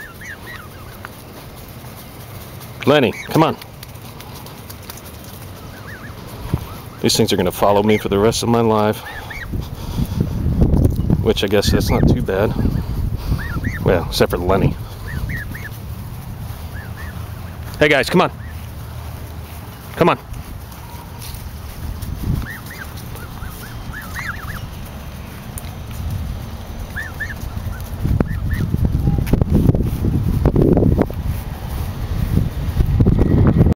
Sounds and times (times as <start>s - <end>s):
Fowl: 0.0s - 1.0s, 8.9s - 10.1s, 11.8s - 14.0s, 14.9s - 15.8s, 22.4s - 24.7s, 26.9s - 29.2s.